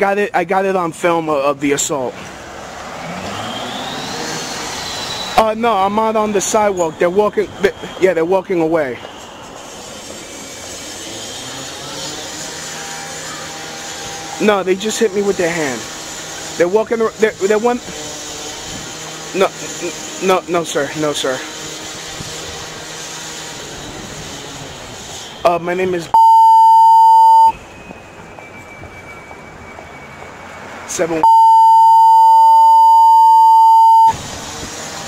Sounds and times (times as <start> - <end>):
Speech: 0.0 - 2.2, 5.4 - 9.0, 14.4 - 15.9, 16.6 - 17.9, 19.4 - 21.5, 25.5 - 26.2, 30.9 - 31.3
Outside, urban or manmade: 0.0 - 35.0.